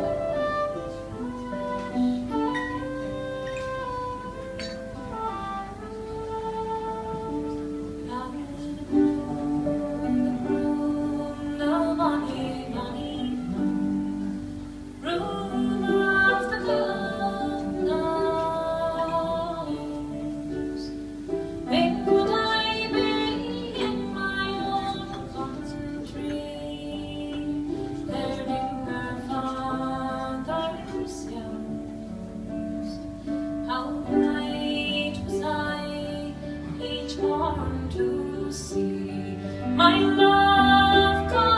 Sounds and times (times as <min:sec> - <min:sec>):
Music: 0:00.0 - 0:41.5
Female singing: 0:05.1 - 0:14.2, 0:15.0 - 0:21.0, 0:21.7 - 0:41.5.